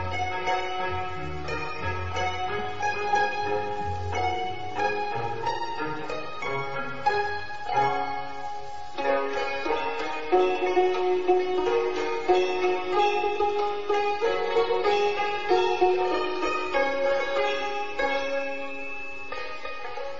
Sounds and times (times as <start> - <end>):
Sitar: 0.0 - 20.1.